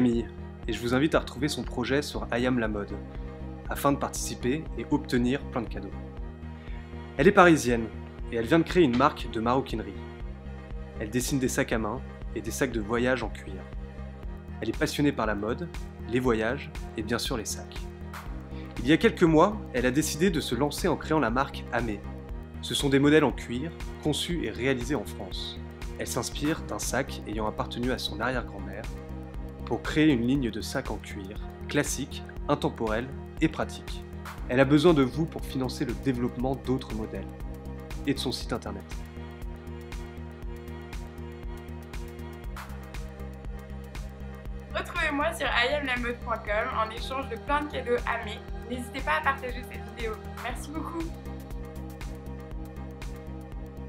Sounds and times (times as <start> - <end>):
Speech: 0.0 - 3.0, 3.7 - 5.9, 7.2 - 10.0, 11.0 - 13.6, 14.6 - 17.8, 18.8 - 22.0, 22.7 - 28.9, 29.7 - 37.3, 38.0 - 38.8, 44.8 - 51.1
Music: 0.0 - 53.8.